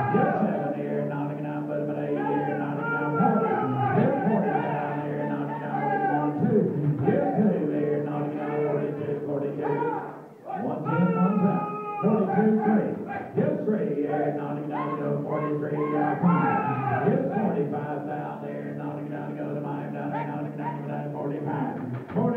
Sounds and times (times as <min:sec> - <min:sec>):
Speech: 0:00.0 - 0:01.3, 0:02.1 - 0:07.6, 0:09.2 - 0:14.0, 0:19.6 - 0:22.3.